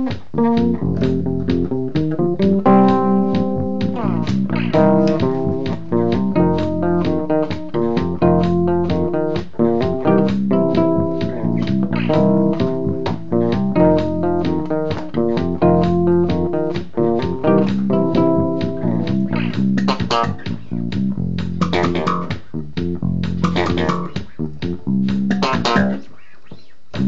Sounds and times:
Bass guitar: 0:00.0 - 0:26.1.

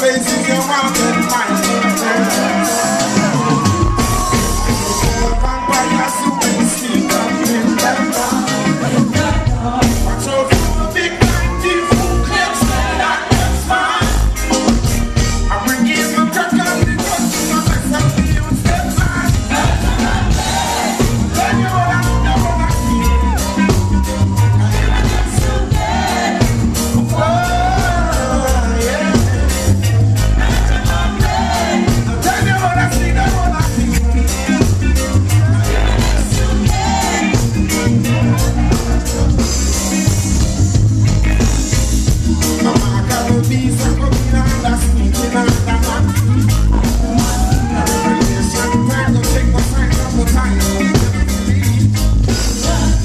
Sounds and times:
Music: 0:00.0 - 0:53.0.

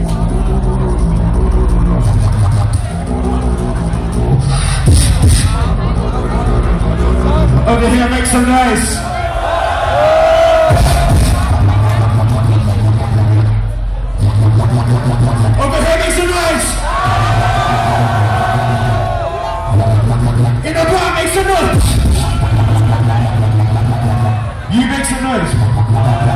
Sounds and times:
Dubstep: 0:00.0 - 0:08.5, 0:10.6 - 0:26.3
Speech: 0:05.6 - 0:09.1, 0:15.6 - 0:16.8, 0:20.6 - 0:21.8, 0:24.7 - 0:25.6.

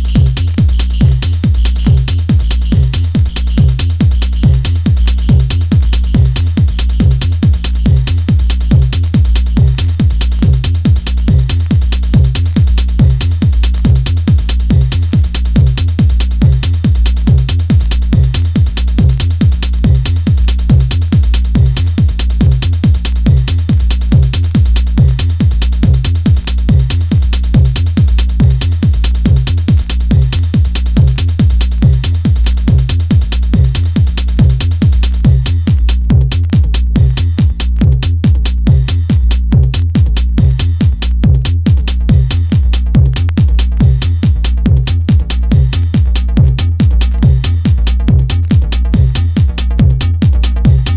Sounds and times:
Music: 0:00.0 - 0:50.9.

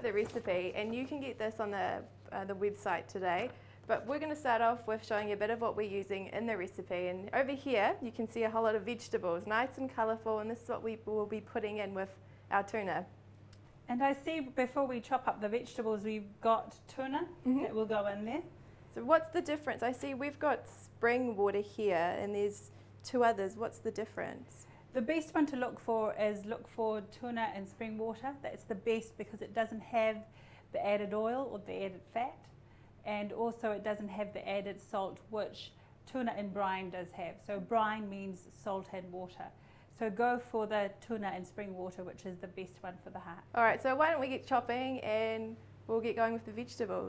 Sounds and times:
Speech: 0:00.0 - 0:13.1, 0:13.9 - 0:32.5, 0:33.1 - 0:47.0.

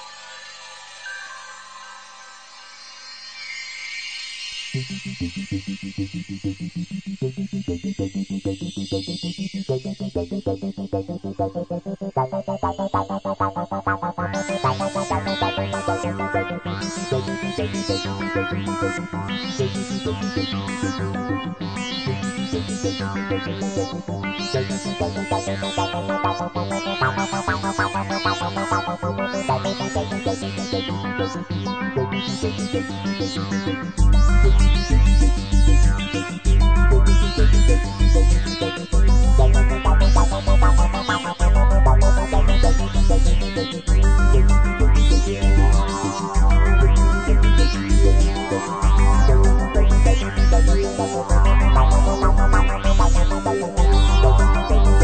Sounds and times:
Synthesizer: 0:00.0 - 0:55.0
New-age music: 0:04.7 - 0:22.2, 0:22.9 - 0:31.5, 0:34.1 - 0:55.0.

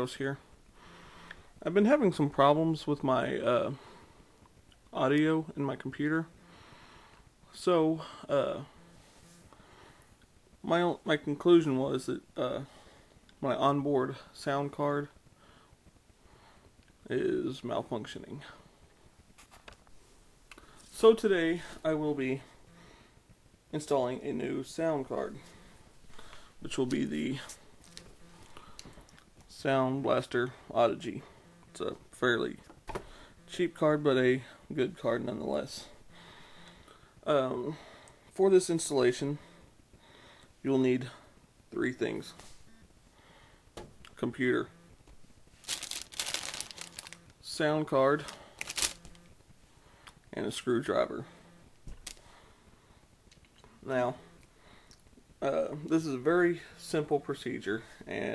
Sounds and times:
Speech: 0:00.0 - 0:00.4, 0:01.6 - 0:03.8, 0:04.9 - 0:06.3, 0:07.5 - 0:08.7, 0:10.6 - 0:12.7, 0:13.4 - 0:15.2, 0:17.0 - 0:18.6, 0:20.9 - 0:22.5, 0:23.7 - 0:25.4, 0:26.6 - 0:27.6, 0:29.5 - 0:32.6, 0:33.5 - 0:36.0, 0:37.2 - 0:37.8, 0:38.4 - 0:39.4, 0:40.6 - 0:42.4, 0:44.2 - 0:44.7, 0:47.4 - 0:48.4, 0:50.3 - 0:51.3, 0:53.8 - 0:54.2, 0:55.4 - 0:58.3.

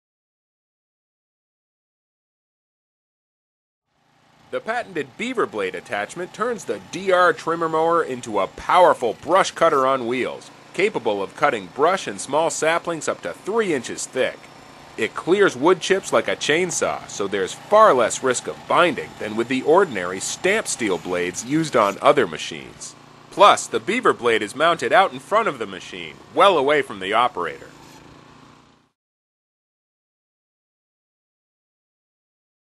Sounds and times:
Speech: 0:04.6 - 0:14.4, 0:15.0 - 0:27.7.

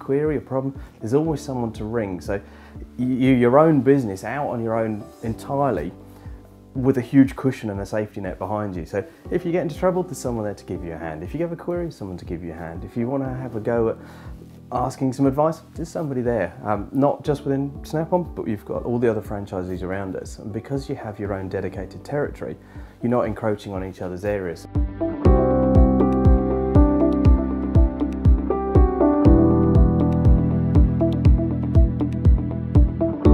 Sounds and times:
Speech: 0:00.0 - 0:06.0, 0:06.8 - 0:14.0, 0:14.7 - 0:24.7.

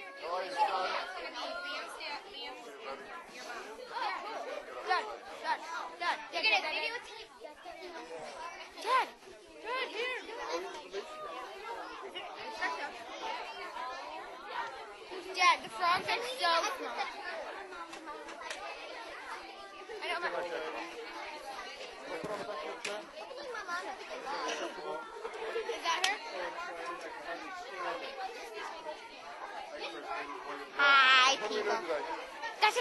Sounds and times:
Speech: 0:00.0 - 0:32.8.

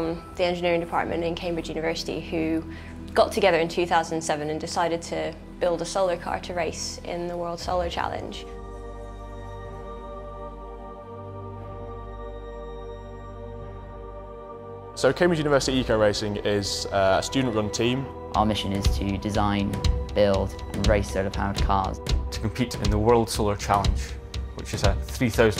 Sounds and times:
Music: 0:00.0 - 0:25.5.

